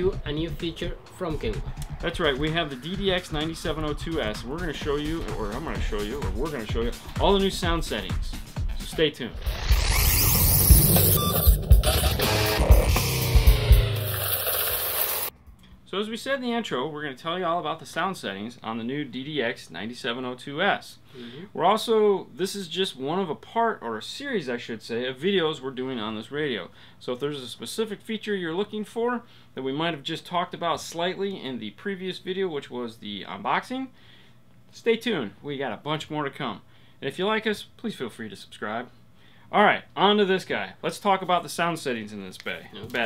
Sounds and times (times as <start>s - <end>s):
Speech: 0.0s - 9.4s, 15.9s - 34.0s, 34.7s - 38.9s, 39.5s - 43.0s.